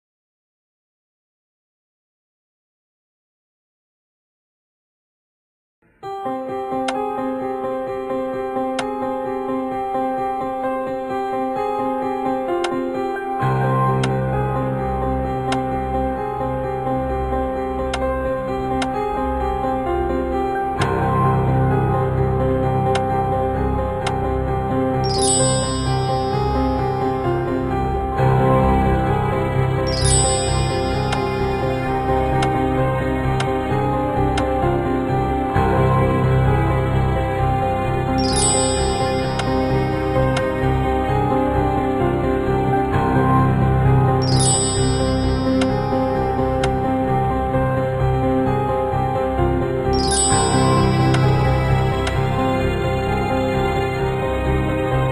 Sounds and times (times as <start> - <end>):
Music: 5.8 - 55.1.